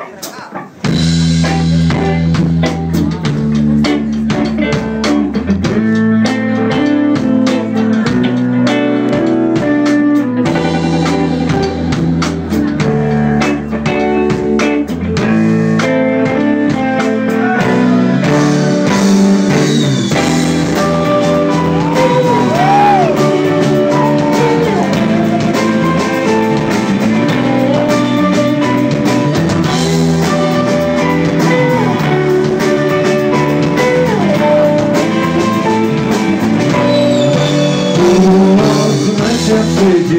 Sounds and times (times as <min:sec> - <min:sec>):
Music: 0:00.0 - 0:40.1.